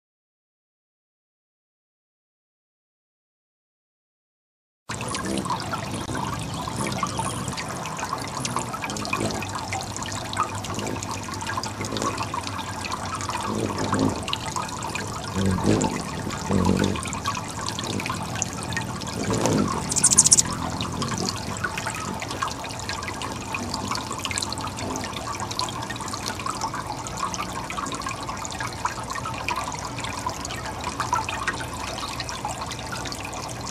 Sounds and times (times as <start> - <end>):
Trickle, dribble: 4.9 - 33.7.